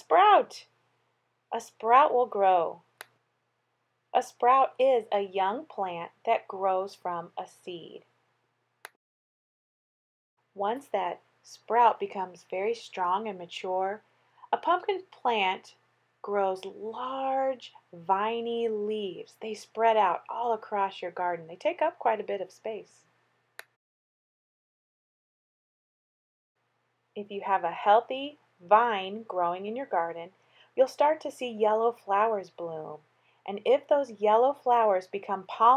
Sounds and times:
Speech: 0.0s - 0.7s, 1.6s - 2.8s, 4.2s - 8.1s, 10.6s - 23.0s, 27.2s - 35.7s.

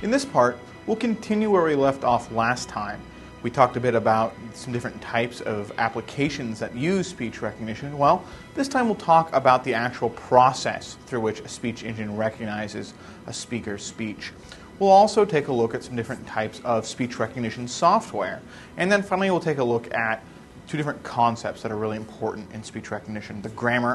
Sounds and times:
Male speech, man speaking: 0.0s - 23.9s
Narration, monologue: 0.0s - 23.9s.

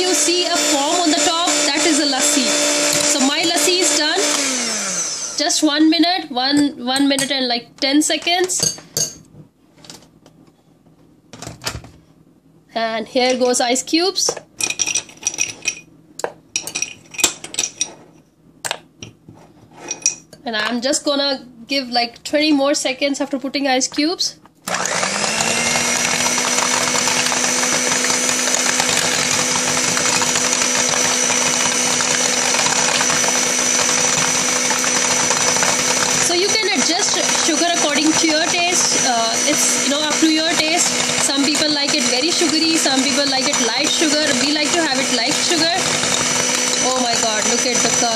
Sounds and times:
Speech: 0.0s - 4.3s, 5.4s - 8.8s, 12.7s - 14.4s, 20.4s - 24.4s, 36.3s - 45.8s, 46.8s - 48.1s.

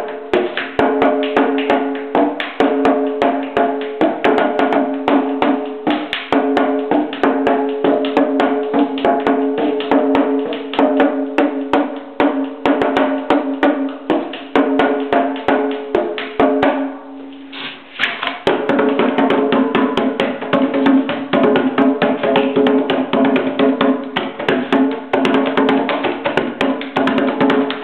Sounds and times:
Wood block: 0.0s - 17.0s, 17.6s - 27.8s
Drum: 0.0s - 27.8s.

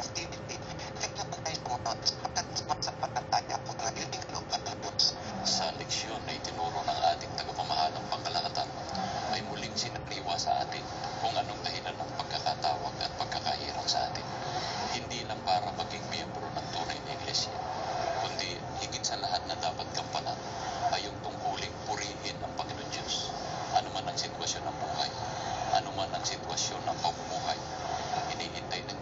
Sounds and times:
Speech: 0.0s - 17.6s, 18.2s - 29.0s.

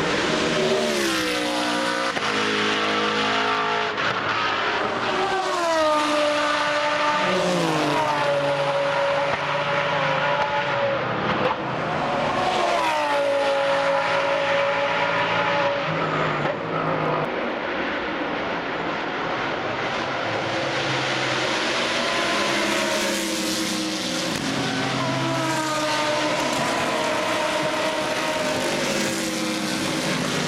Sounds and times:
Race car, auto racing: 0.0s - 30.4s.

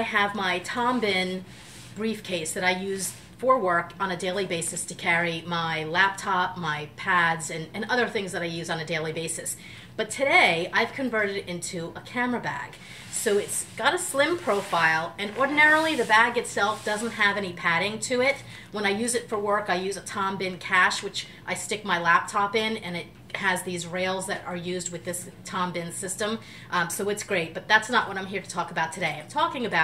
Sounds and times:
Speech: 0.0s - 1.4s, 2.0s - 29.8s.

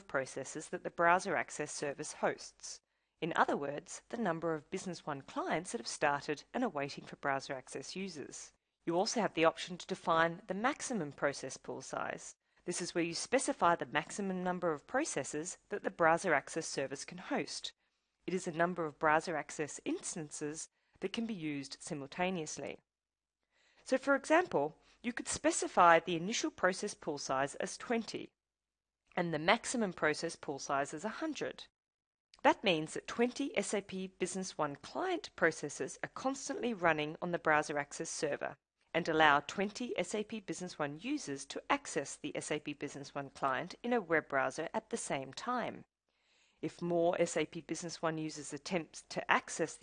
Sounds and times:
Narration, monologue: 0.0s - 28.4s, 29.0s - 31.7s, 32.3s - 49.8s.

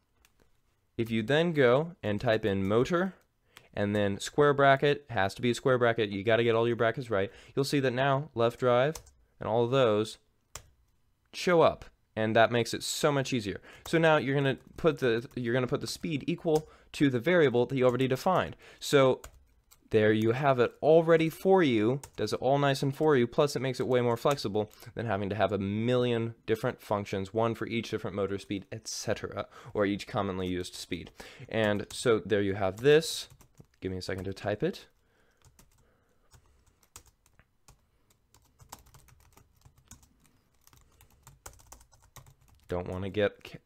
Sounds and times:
Speech: 1.0s - 3.2s, 3.8s - 10.2s, 11.4s - 19.2s, 19.9s - 34.9s, 42.7s - 43.6s.

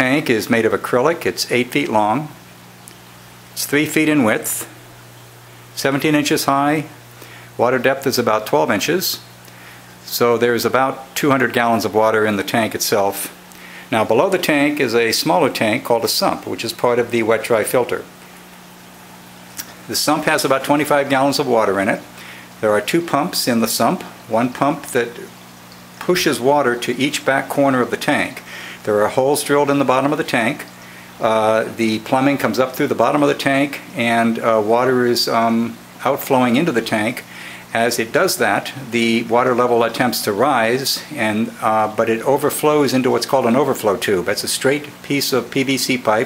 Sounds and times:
Speech: 0.0s - 2.4s, 3.6s - 4.8s, 5.8s - 7.0s, 7.6s - 9.3s, 10.0s - 18.1s, 19.6s - 25.4s, 26.0s - 46.2s.

